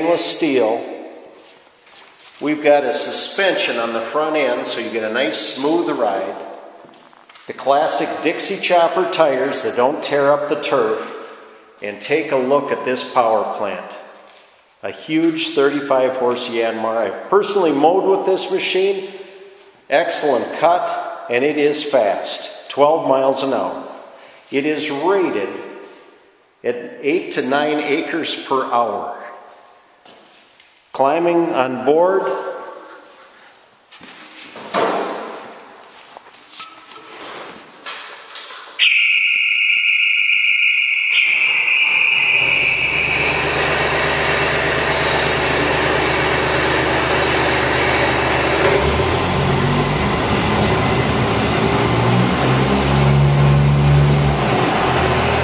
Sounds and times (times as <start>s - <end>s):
Vehicle: 41.7s - 55.4s.